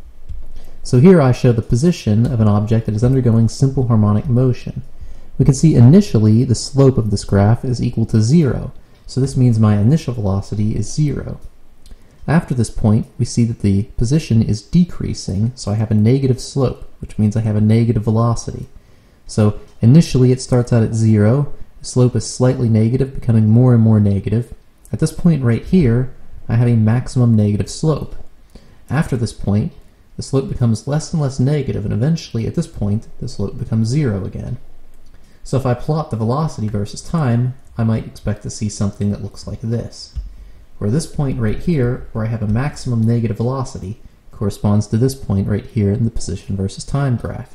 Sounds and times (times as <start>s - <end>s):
Speech: 0.8s - 11.6s, 12.3s - 28.3s, 28.9s - 34.7s, 35.4s - 47.5s.